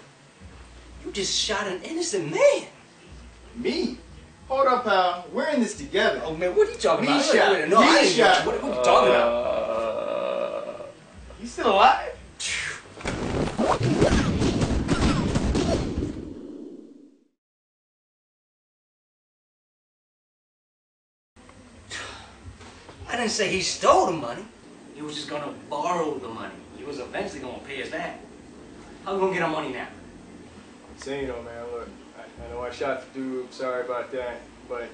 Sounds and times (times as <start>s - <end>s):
Inside, small room: 0.0s - 17.4s
Silence: 13.1s - 17.4s.